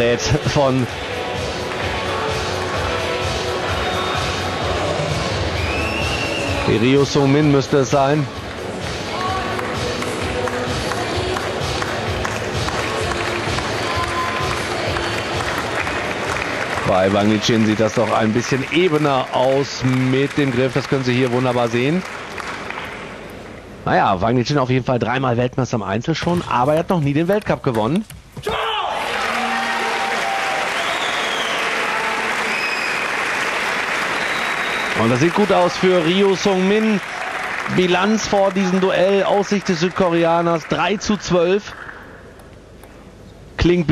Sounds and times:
Music: 0:00.0 - 0:21.8
Speech: 0:16.9 - 0:22.0, 0:35.0 - 0:37.0, 0:37.7 - 0:41.7.

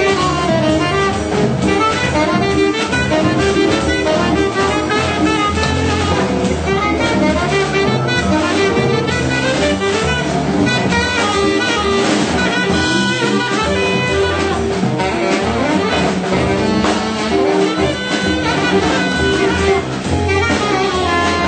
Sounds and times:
Drum: 0:00.0 - 0:21.4
Guitar: 0:00.0 - 0:21.4
Saxophone: 0:00.0 - 0:21.4.

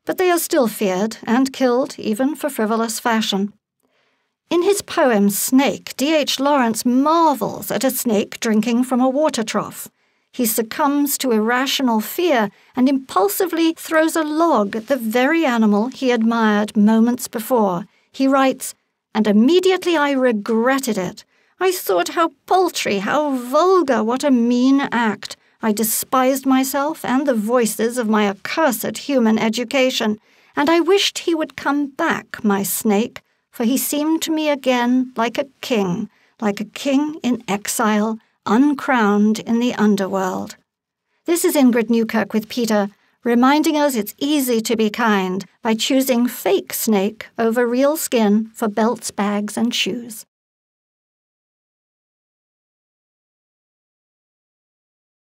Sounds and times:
Speech: 0:00.0 - 0:03.5, 0:04.5 - 0:40.6, 0:41.3 - 0:50.3.

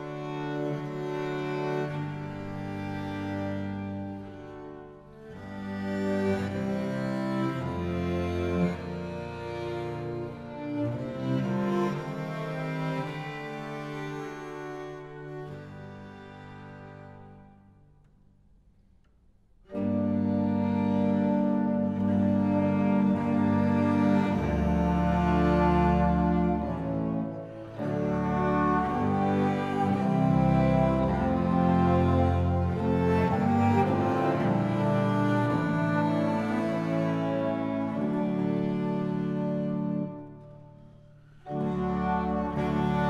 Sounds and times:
Cello: 0:00.0 - 0:43.0.

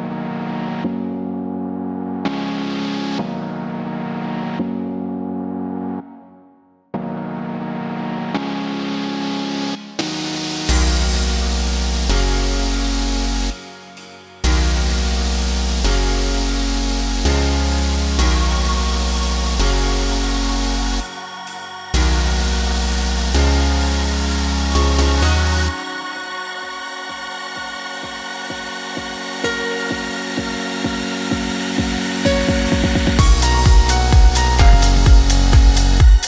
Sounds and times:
Music: 0:00.0 - 0:36.2.

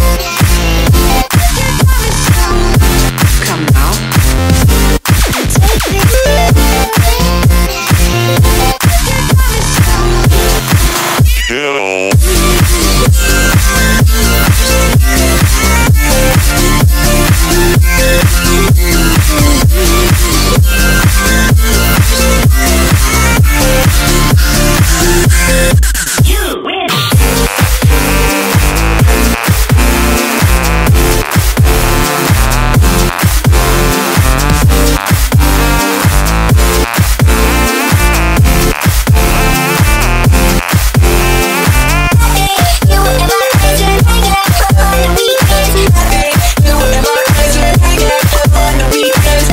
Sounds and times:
Electronic dance music: 0:00.0 - 0:49.5.

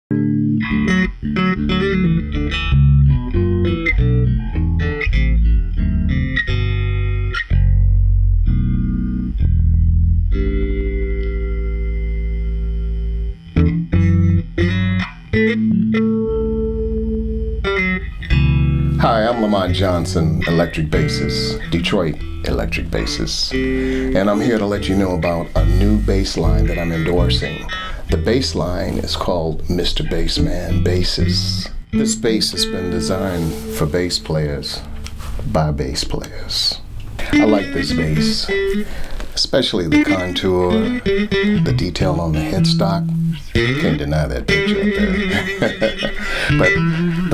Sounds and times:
Bass guitar: 0:00.1 - 0:47.3
Strum: 0:00.2 - 0:47.3
Speech: 0:19.0 - 0:38.6, 0:39.4 - 0:40.9, 0:41.6 - 0:44.6.

